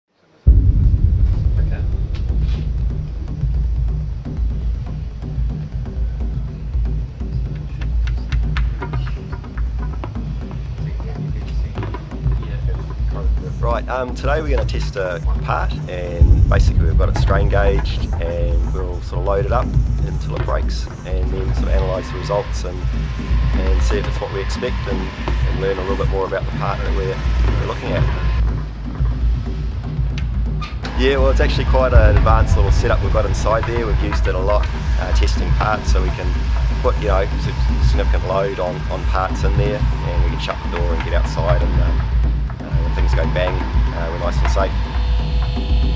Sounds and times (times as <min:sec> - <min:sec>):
Music: 0:00.1 - 0:45.9
Speech: 0:01.6 - 0:02.0, 0:10.8 - 0:22.9, 0:23.6 - 0:28.2, 0:30.9 - 0:42.0, 0:42.6 - 0:44.8.